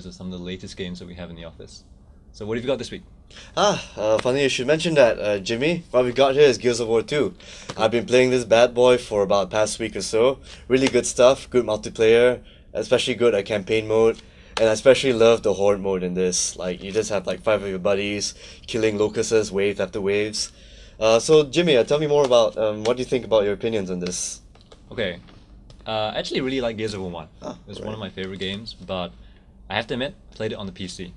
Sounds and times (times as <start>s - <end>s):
Speech: 0.0s - 3.0s, 3.6s - 25.3s, 25.9s - 29.1s, 29.7s - 31.1s.